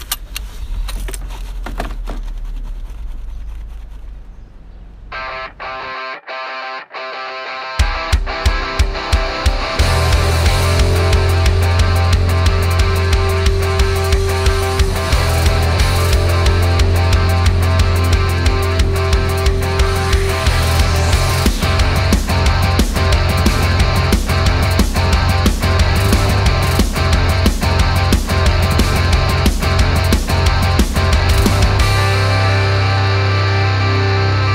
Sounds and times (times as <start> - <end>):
Theme music: 8.4 - 34.5.